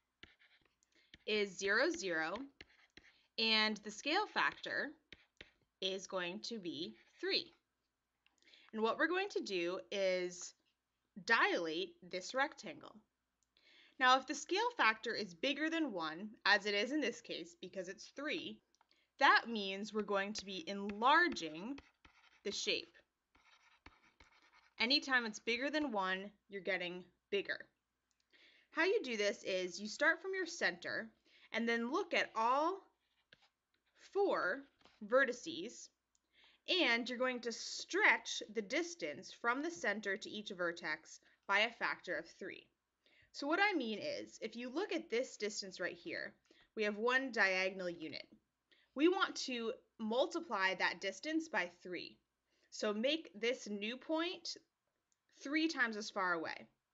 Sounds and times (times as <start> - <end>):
Speech: 1.3 - 2.5, 3.4 - 5.0, 5.8 - 7.6, 8.7 - 10.6, 11.2 - 13.0, 14.0 - 18.6, 19.2 - 21.8, 22.5 - 23.0, 24.8 - 27.7, 28.8 - 32.9, 34.1 - 35.9, 36.7 - 42.7, 43.4 - 48.3, 49.0 - 52.2, 52.8 - 54.6, 55.4 - 56.7.